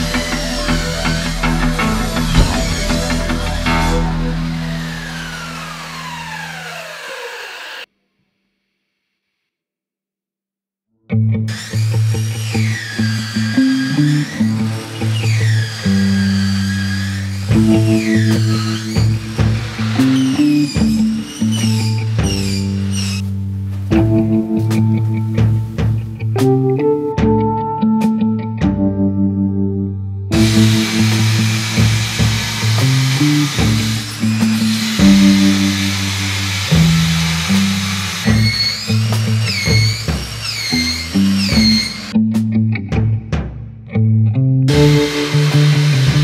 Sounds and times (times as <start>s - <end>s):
Music: 0.0s - 6.8s, 11.1s - 46.2s.